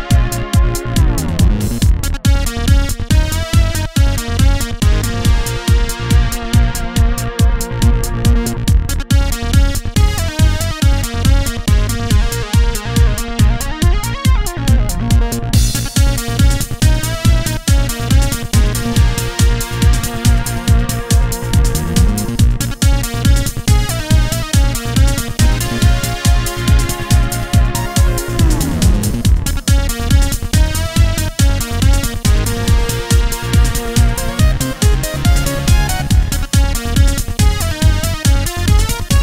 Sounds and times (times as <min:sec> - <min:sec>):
Music: 0:00.0 - 0:39.2.